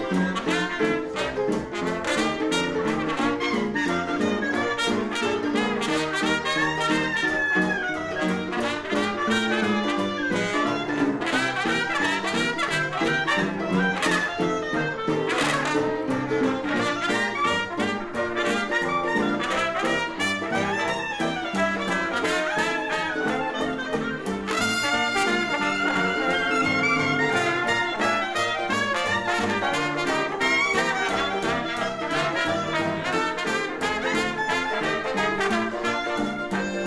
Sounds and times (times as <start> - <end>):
Music: 0.0 - 36.8.